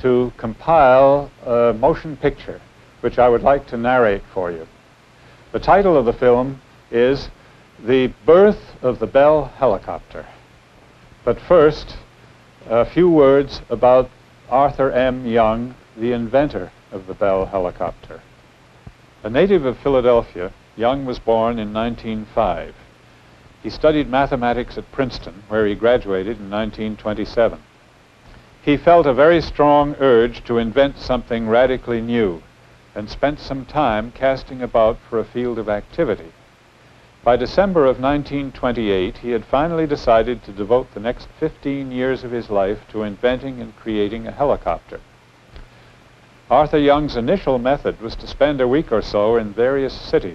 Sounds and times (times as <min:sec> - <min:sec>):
Speech: 0:00.0 - 0:04.8, 0:05.5 - 0:10.4, 0:11.2 - 0:18.3, 0:19.2 - 0:22.9, 0:23.6 - 0:27.7, 0:28.6 - 0:36.4, 0:37.3 - 0:45.1, 0:46.5 - 0:50.3.